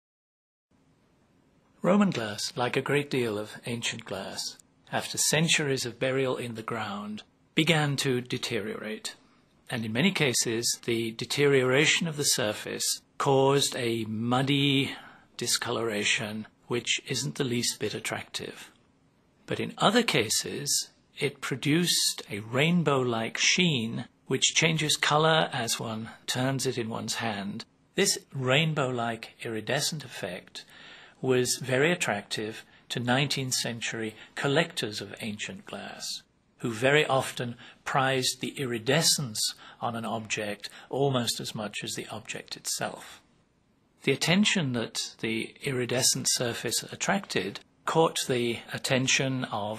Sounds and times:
Speech: 1.8s - 18.8s, 19.5s - 43.2s, 44.0s - 49.7s.

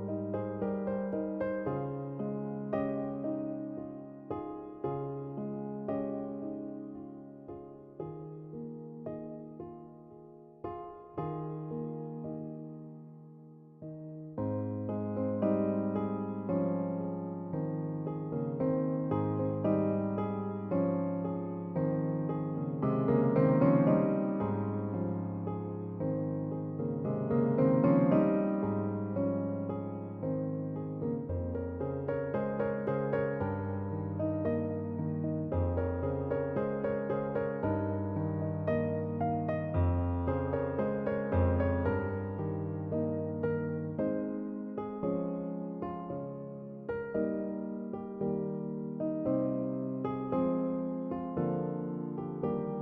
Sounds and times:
Music: 0.0s - 52.8s.

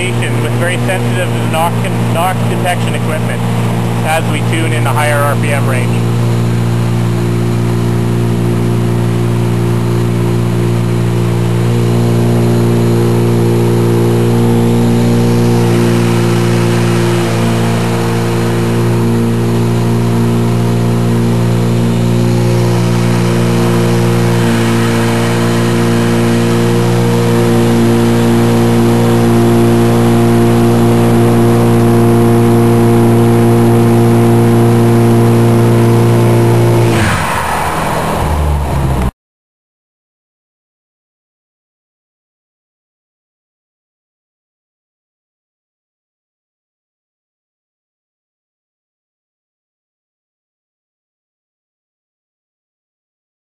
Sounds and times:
Medium engine (mid frequency): 0.0s - 39.1s.

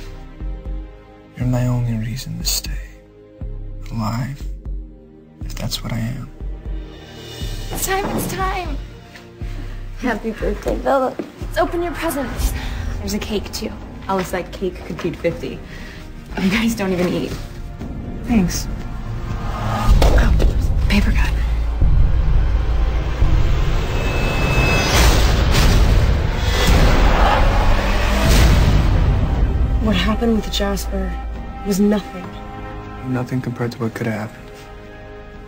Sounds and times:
Music: 0.0s - 35.4s.

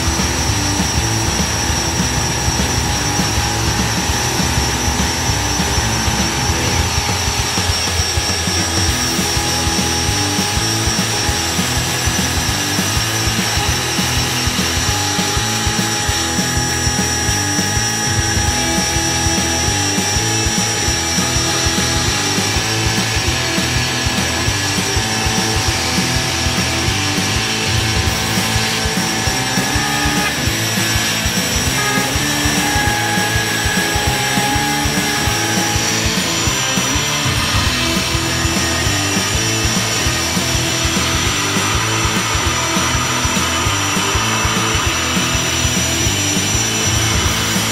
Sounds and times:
Music: 0.0s - 47.7s.

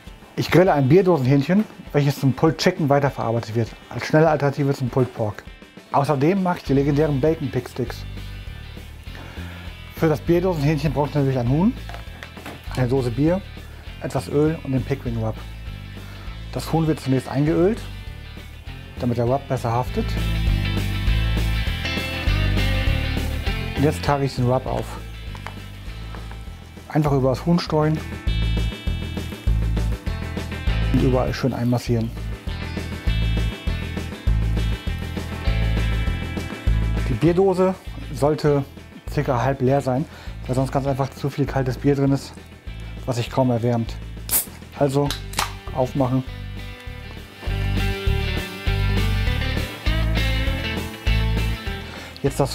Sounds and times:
Music: 0.0s - 52.5s
Speech: 0.4s - 8.1s, 9.9s - 11.8s, 12.7s - 15.5s, 16.5s - 17.9s, 19.0s - 20.2s, 23.8s - 25.0s, 26.9s - 28.1s, 30.9s - 32.2s, 37.0s - 42.4s, 43.1s - 44.0s, 44.7s - 46.3s, 52.2s - 52.5s.

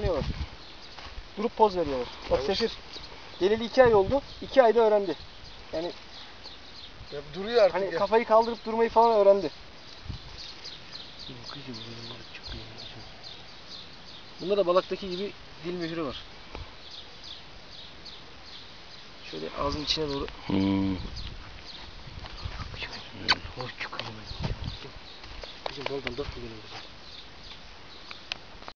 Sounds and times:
Speech: 1.4s - 2.8s, 25.7s - 26.8s.

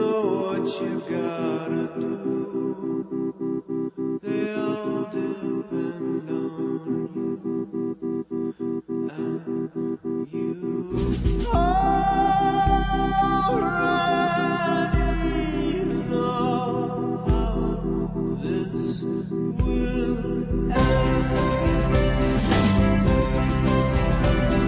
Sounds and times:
Music: 20.8s - 24.6s.

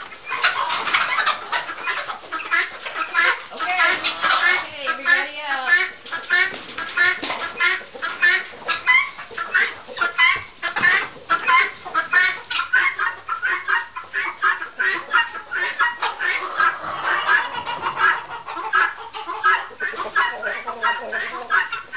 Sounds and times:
Chicken, rooster: 0.0s - 21.9s.

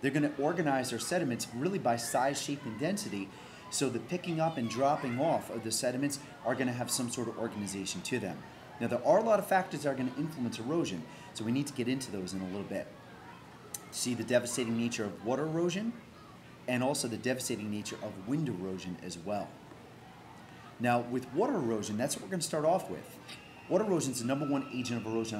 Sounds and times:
Speech: 0.0s - 19.6s, 20.8s - 25.3s.

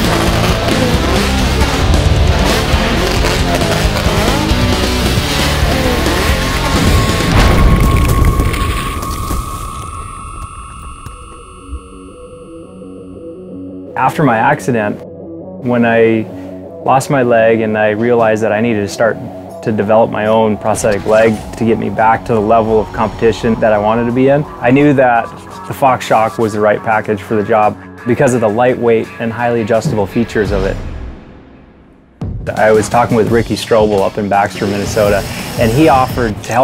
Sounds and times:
Music: 0.0s - 36.6s
Speech: 14.0s - 15.0s, 15.6s - 30.8s, 32.5s - 36.6s.

